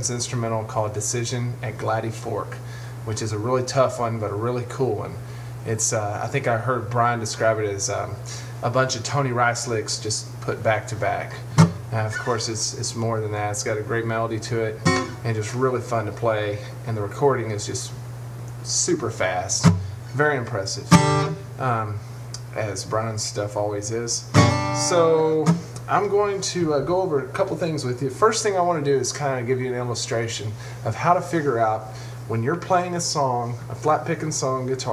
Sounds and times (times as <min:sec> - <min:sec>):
Speech: 0:00.0 - 0:18.0, 0:18.6 - 0:21.0, 0:21.6 - 0:34.9
Guitar: 0:00.0 - 0:34.9.